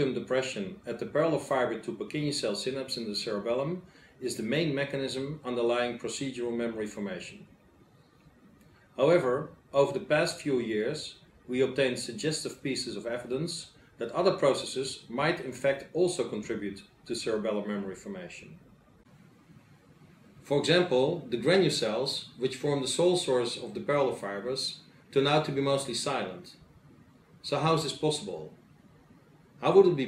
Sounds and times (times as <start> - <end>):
Speech: 0.0 - 7.5, 9.0 - 18.6, 20.4 - 26.6, 27.4 - 28.6, 29.6 - 30.0.